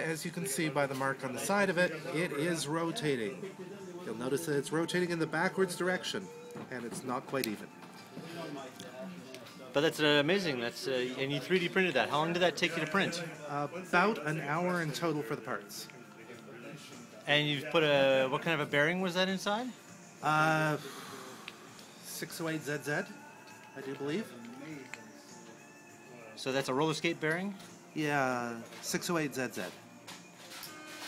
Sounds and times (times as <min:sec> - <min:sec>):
Music: 0:00.0 - 0:31.0.